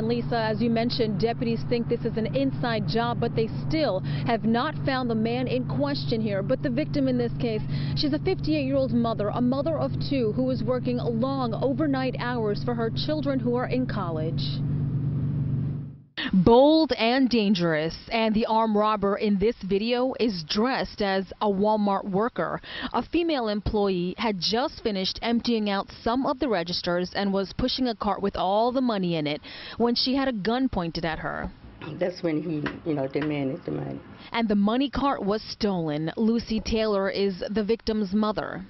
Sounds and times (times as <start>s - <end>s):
Speech: 0.0s - 14.6s, 30.2s - 38.7s.